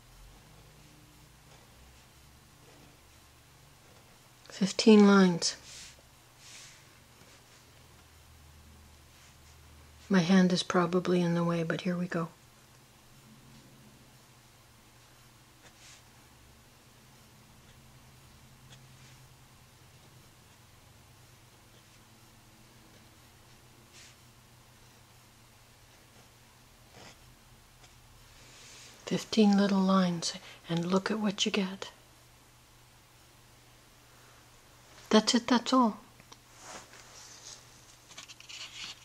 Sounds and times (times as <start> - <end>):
Speech: 4.5 - 5.7, 10.1 - 12.4, 29.1 - 32.0, 35.1 - 36.1
Writing: 15.6 - 16.1, 18.6 - 19.3, 19.9 - 20.7, 21.5 - 22.1, 25.8 - 28.0.